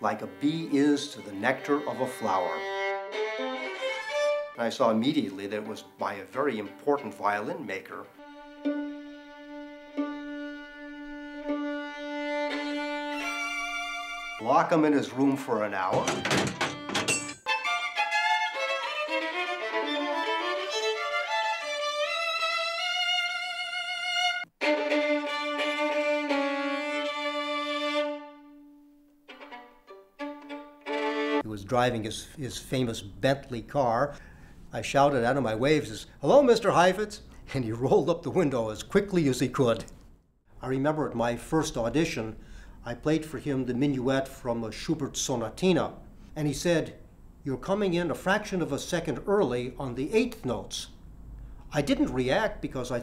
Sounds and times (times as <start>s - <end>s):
Speech: 0.0s - 2.6s, 4.6s - 8.1s, 14.4s - 16.2s, 31.4s - 39.9s, 40.6s - 51.0s, 51.7s - 53.0s
Violin, fiddle: 0.0s - 4.7s, 5.5s - 16.2s, 17.5s - 31.5s.